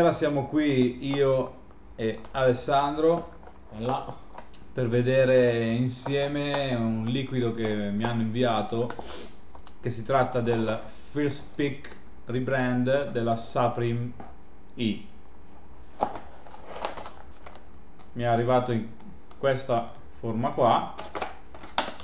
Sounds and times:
Speech: 0.0 - 4.2, 4.8 - 9.0, 9.8 - 14.2, 14.8 - 15.1, 18.2 - 21.0.

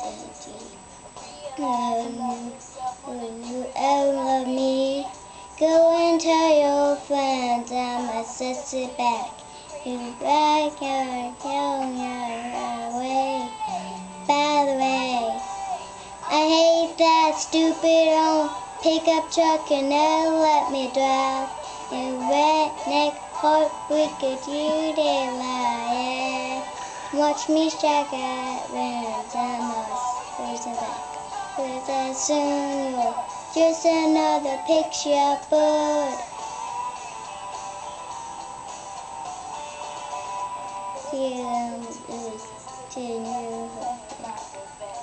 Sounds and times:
Child singing: 0.0 - 36.4, 41.0 - 45.0
Music: 0.0 - 45.0.

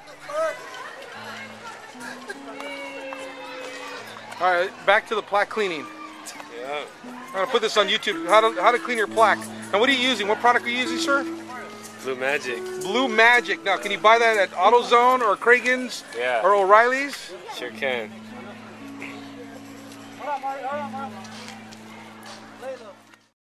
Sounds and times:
Music: 0.0 - 23.3.

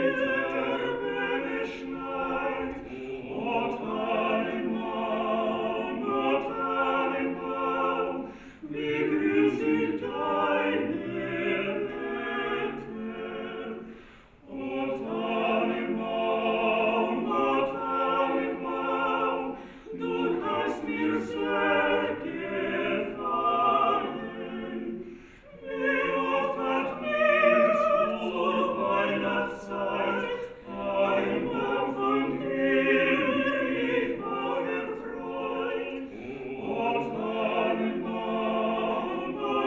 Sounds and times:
Christmas music: 0.0 - 39.6
Opera: 0.0 - 39.6.

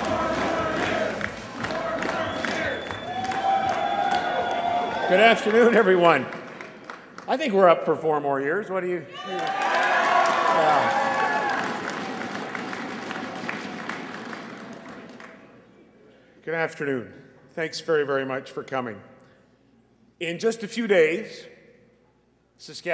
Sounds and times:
Male speech, man speaking: 5.1 - 6.3, 7.3 - 9.4, 16.4 - 19.1, 20.2 - 21.6, 22.6 - 22.9.

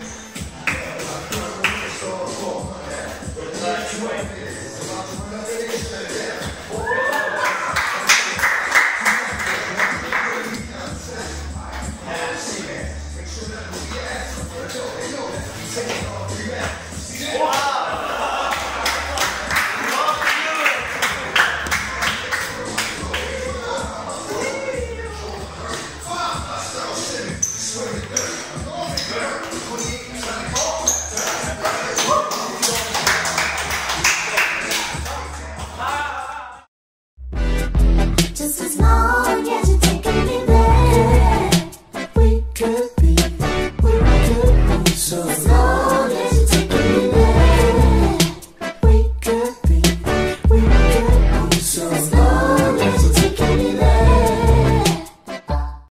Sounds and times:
Rhythm and blues: 0.0 - 36.2, 37.2 - 55.9.

